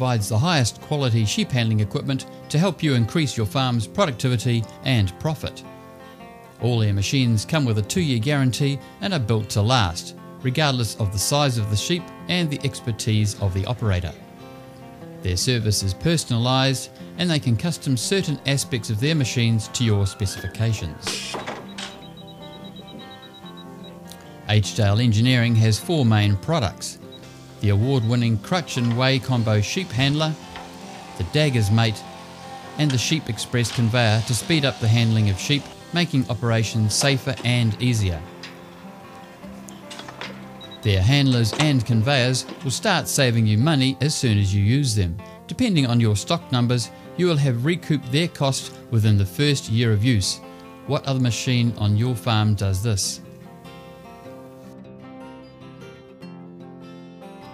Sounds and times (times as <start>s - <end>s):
Speech: 0.0s - 5.6s, 6.6s - 14.2s, 15.2s - 21.4s, 24.5s - 27.0s, 27.6s - 30.4s, 31.1s - 32.0s, 32.8s - 38.3s, 40.8s - 53.3s
Music: 0.0s - 57.5s.